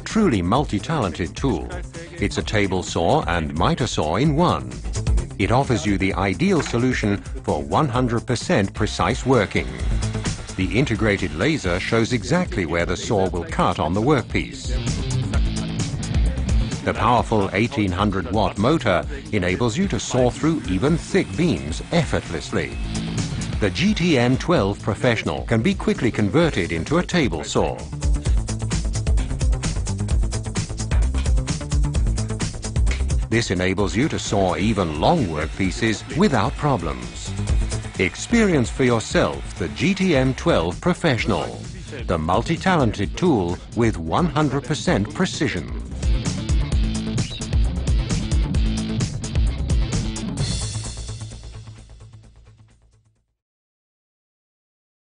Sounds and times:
Speech: 0.0 - 4.8, 5.4 - 9.8, 10.6 - 15.0, 16.8 - 22.8, 23.6 - 27.9, 33.3 - 37.3, 38.0 - 45.8
Music: 0.0 - 53.4.

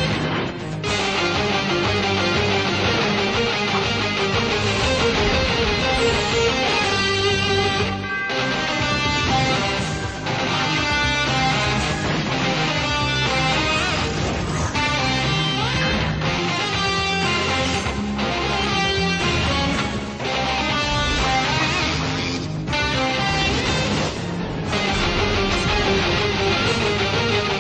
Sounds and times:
Guitar: 0.0 - 27.6.

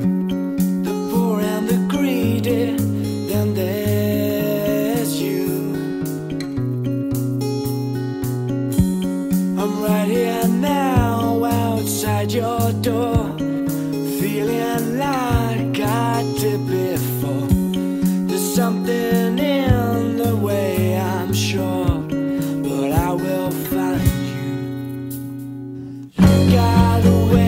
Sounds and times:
Music: 0.0 - 27.4.

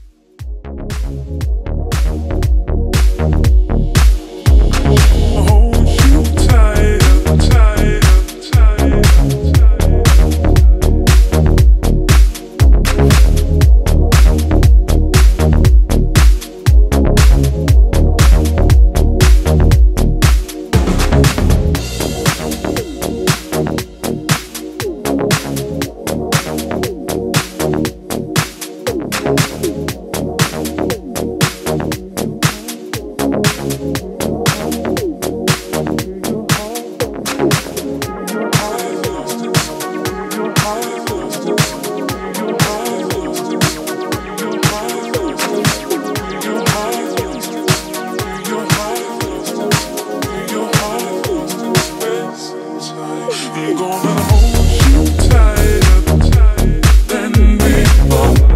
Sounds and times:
Music: 0.0 - 58.5.

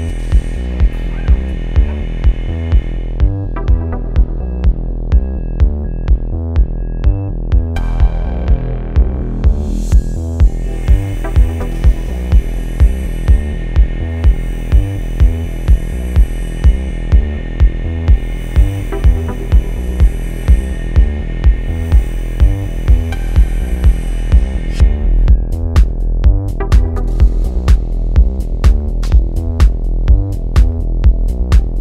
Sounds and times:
Music: 0.0 - 31.8.

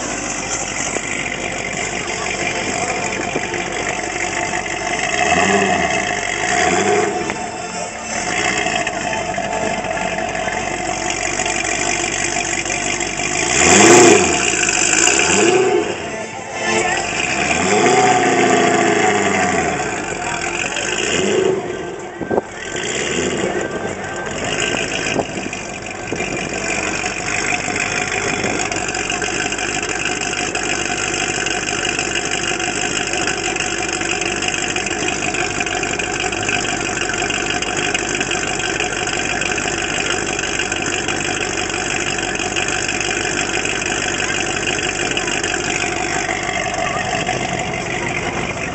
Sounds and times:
Engine: 0.0 - 48.7.

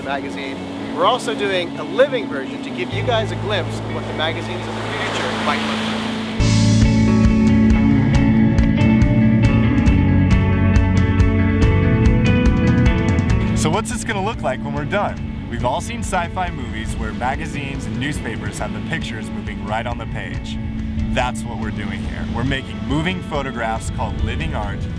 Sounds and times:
Speech: 0.0 - 5.7, 13.6 - 24.9
Music: 0.0 - 24.9.

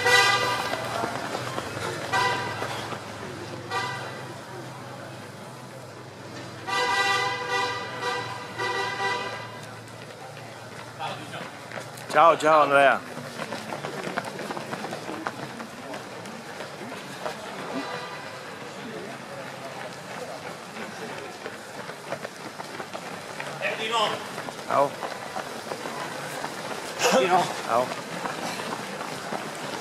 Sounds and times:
Outside, urban or manmade: 0.0 - 29.8
Run: 0.0 - 29.8.

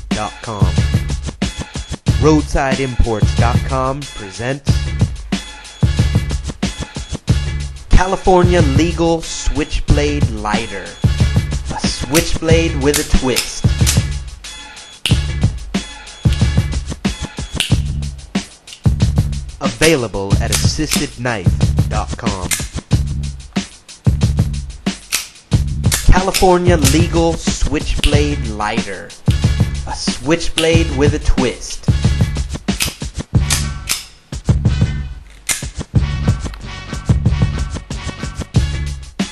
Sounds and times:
Music: 0.0 - 39.3
Speech: 0.1 - 0.8, 2.2 - 4.8, 7.9 - 11.0, 11.7 - 13.6, 19.6 - 22.6, 26.1 - 29.2, 29.8 - 31.9.

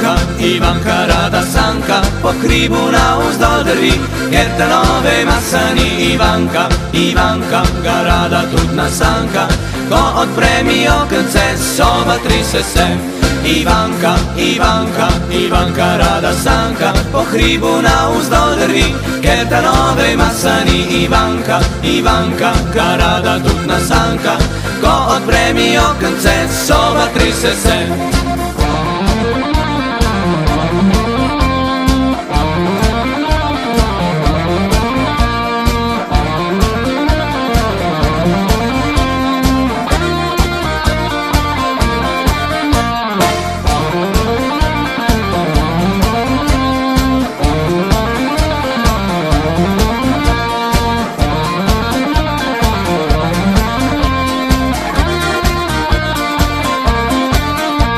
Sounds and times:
Music: 0.0 - 57.9.

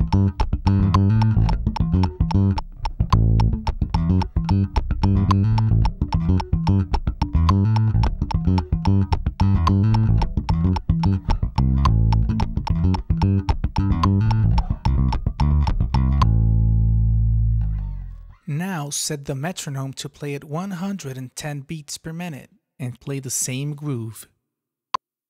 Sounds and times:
Bass guitar: 0.0 - 18.6
Speech: 18.5 - 24.4.

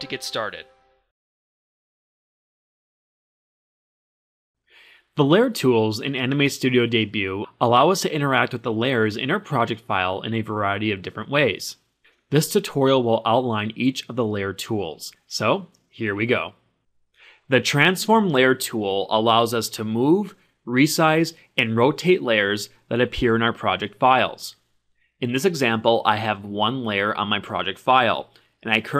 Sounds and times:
Speech: 0.0 - 0.7, 5.2 - 16.6, 17.5 - 24.6, 25.2 - 28.9.

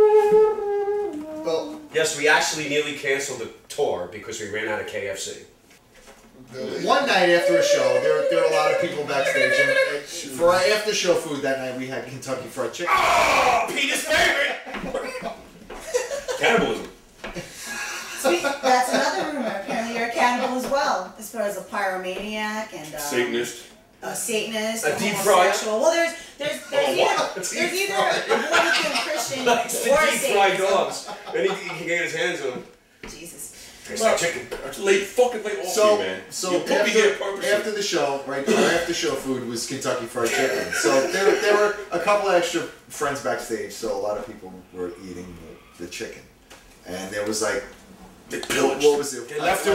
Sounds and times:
Speech: 6.5 - 14.6.

